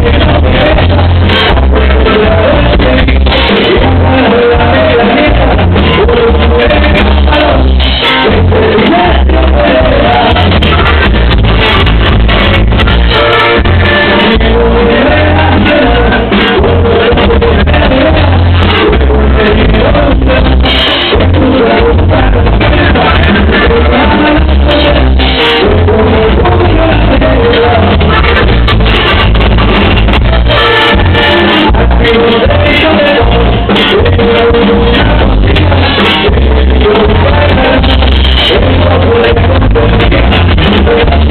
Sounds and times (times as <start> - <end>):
Music: 0.0 - 41.3.